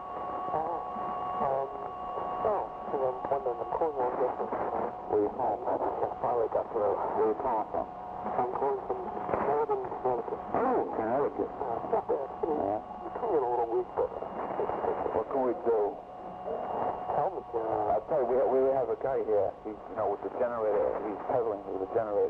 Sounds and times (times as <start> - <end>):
Radio: 0.1 - 22.3
Speech: 0.5 - 4.5, 5.1 - 22.3.